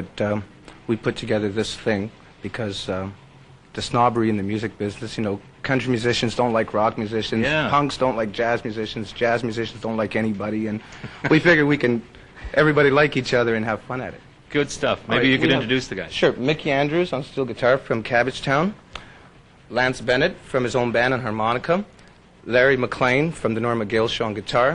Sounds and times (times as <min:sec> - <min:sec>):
Speech: 0:00.0 - 0:18.8, 0:19.7 - 0:24.7
Inside, small room: 0:00.0 - 0:24.7.